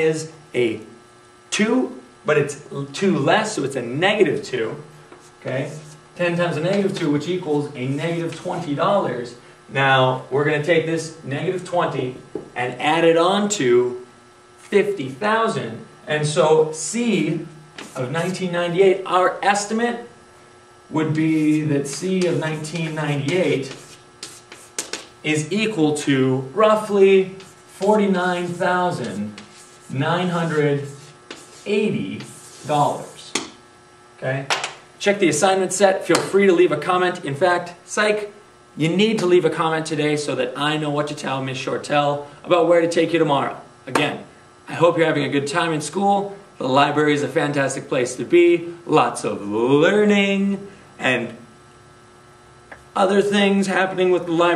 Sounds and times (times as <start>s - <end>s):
Speech: 0.0s - 14.1s, 14.7s - 20.1s, 20.9s - 23.8s, 25.2s - 33.4s, 34.2s - 51.5s, 53.0s - 54.5s
Inside, small room: 0.0s - 54.5s.